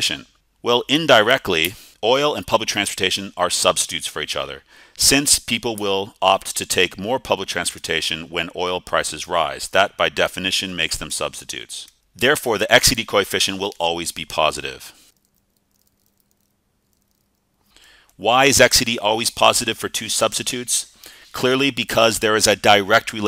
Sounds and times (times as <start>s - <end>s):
Speech: 0.0s - 15.0s, 18.2s - 23.2s.